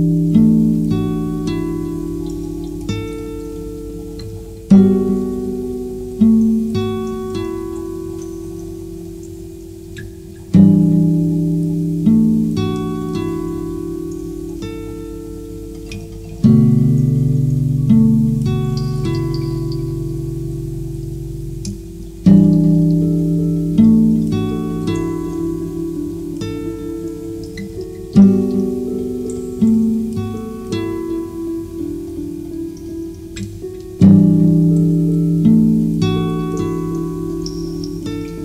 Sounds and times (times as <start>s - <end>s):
Music: 0.0s - 38.4s
Raindrop: 0.0s - 38.4s.